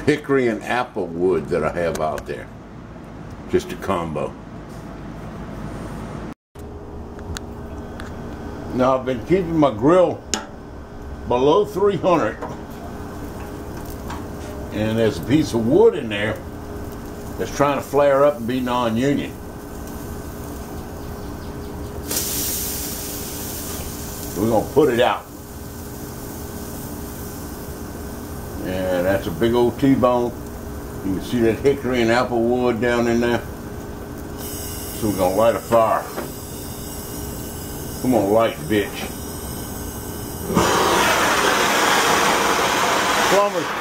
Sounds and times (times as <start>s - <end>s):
Speech: 0.0s - 2.5s, 3.5s - 4.4s, 8.7s - 10.2s, 11.3s - 12.4s, 14.7s - 16.4s, 17.4s - 19.4s, 24.4s - 25.3s, 28.6s - 30.4s, 31.0s - 33.5s, 35.0s - 36.2s, 38.0s - 39.1s, 43.3s - 43.8s.